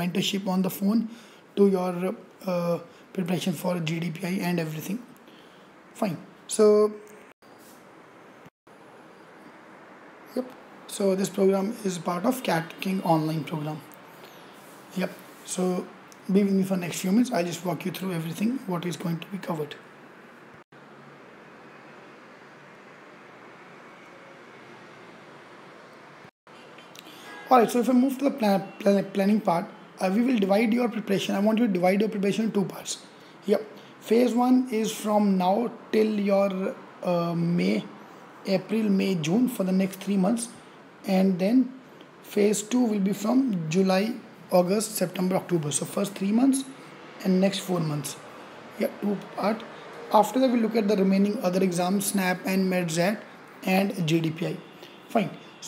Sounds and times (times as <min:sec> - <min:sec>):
Speech: 0:00.0 - 0:05.1, 0:06.0 - 0:07.1, 0:10.3 - 0:13.9, 0:14.9 - 0:19.8, 0:27.5 - 0:55.6.